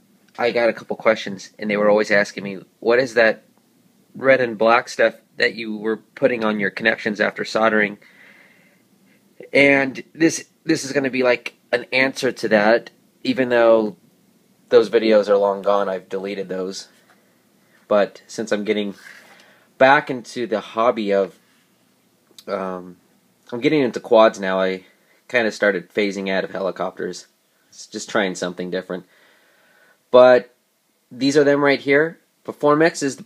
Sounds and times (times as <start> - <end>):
Speech: 0.4 - 3.5, 4.2 - 8.0, 9.4 - 14.0, 14.7 - 16.9, 17.9 - 19.2, 19.8 - 21.4, 22.4 - 29.1, 30.1 - 33.2.